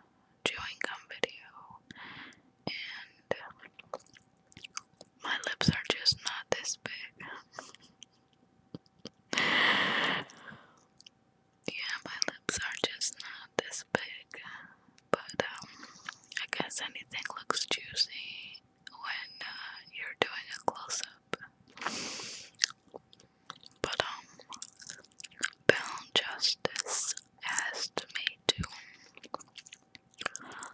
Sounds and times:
Whispering: 0.5s - 1.8s, 2.7s - 3.8s, 5.3s - 7.5s, 11.7s - 14.6s, 15.2s - 21.5s, 23.8s - 29.3s, 30.2s - 30.7s
Chewing, mastication: 3.6s - 5.2s, 10.8s - 11.2s, 15.6s - 16.6s, 21.7s - 26.0s, 26.7s - 27.4s, 28.0s - 30.7s.

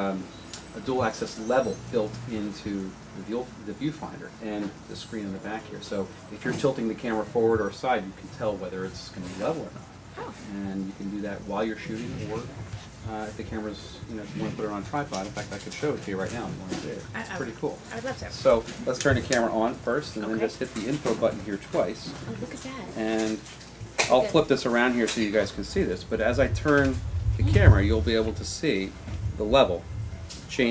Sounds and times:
Speech: 0.0s - 12.5s, 13.1s - 23.4s, 24.0s - 29.8s.

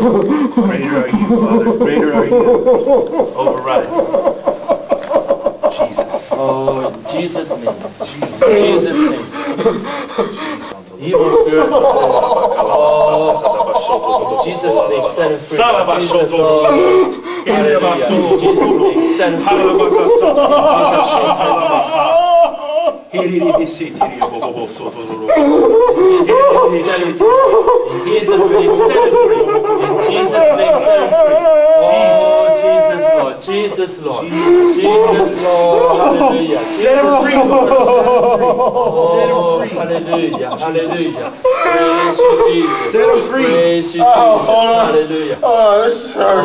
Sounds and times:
Speech: 0.6s - 2.8s, 5.7s - 9.4s, 10.8s - 22.0s, 23.1s - 46.4s.

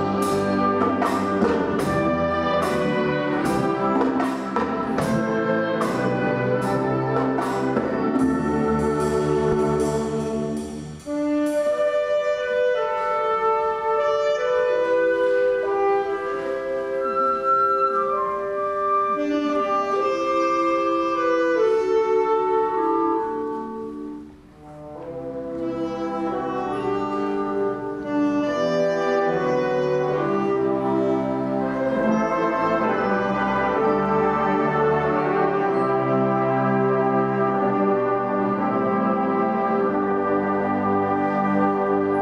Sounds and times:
Classical music: 0.0s - 42.2s
Orchestra: 0.0s - 42.2s.

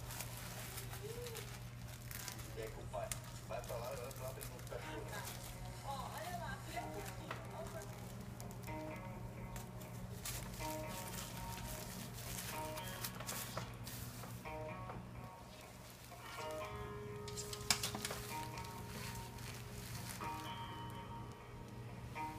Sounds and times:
Music: 0.0s - 22.3s
Speech: 2.4s - 8.0s.

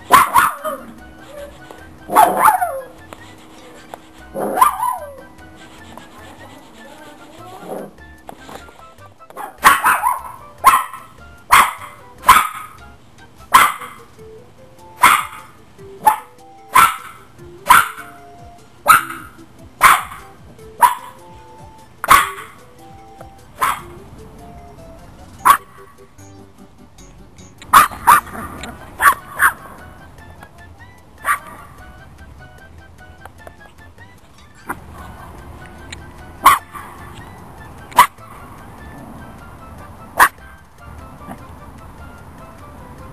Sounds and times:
Music: 0.0s - 43.1s
Bark: 0.1s - 0.9s, 2.1s - 2.9s, 4.4s - 5.2s, 9.4s - 12.8s, 13.5s - 14.1s, 15.0s - 18.2s, 18.9s - 21.2s, 22.1s - 22.6s, 23.6s - 23.9s, 25.4s - 25.7s, 27.7s - 28.4s, 29.0s - 29.6s, 31.2s - 31.6s, 36.4s - 36.9s, 38.0s - 38.2s, 40.2s - 40.4s.

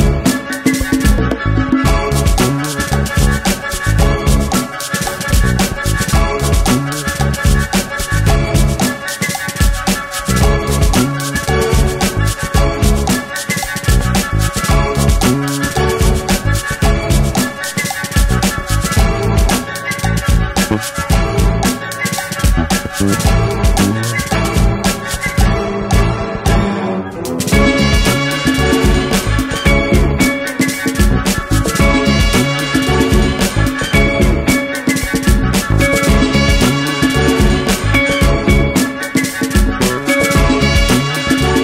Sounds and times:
Music: 0.0s - 41.6s.

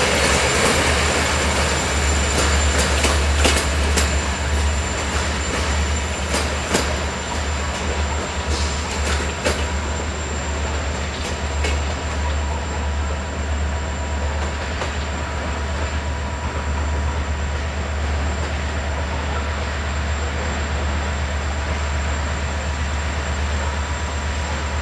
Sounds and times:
Railroad car, train wagon: 0.0s - 24.8s
Train: 0.0s - 24.8s.

